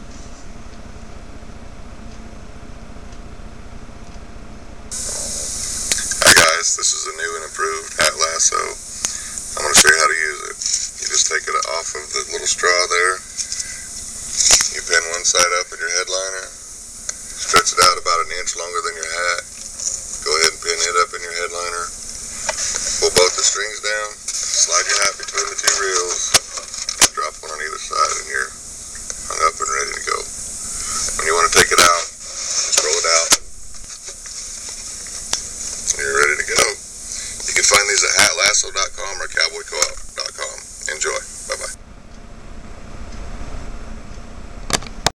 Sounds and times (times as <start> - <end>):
Speech: 5.1 - 16.6, 17.4 - 19.5, 20.2 - 21.9, 22.8 - 28.6, 29.3 - 33.4, 35.9 - 41.8.